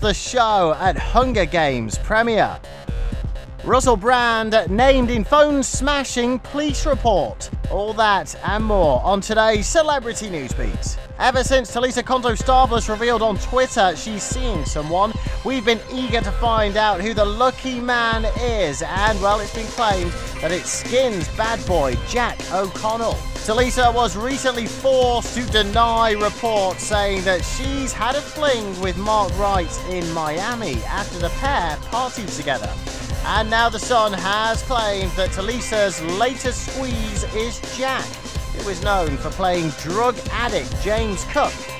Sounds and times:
Speech: 0:00.0 - 0:02.6, 0:03.6 - 0:41.6
Music: 0:00.0 - 0:41.7.

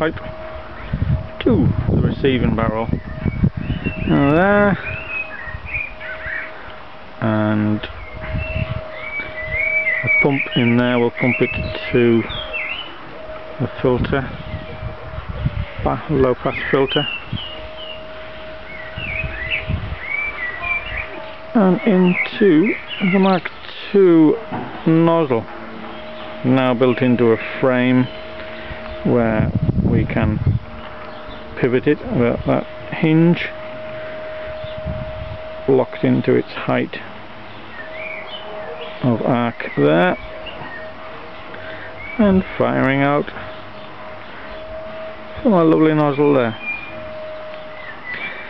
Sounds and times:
Outside, rural or natural: 0:00.0 - 0:48.4
Speech: 0:01.4 - 0:02.9, 0:04.1 - 0:04.8, 0:07.2 - 0:07.9, 0:10.0 - 0:12.3, 0:13.6 - 0:14.3, 0:15.7 - 0:17.1, 0:20.6 - 0:25.5, 0:26.4 - 0:28.1, 0:29.0 - 0:30.4, 0:31.6 - 0:33.5, 0:35.7 - 0:37.1, 0:39.0 - 0:40.2, 0:42.2 - 0:43.4, 0:45.4 - 0:46.6.

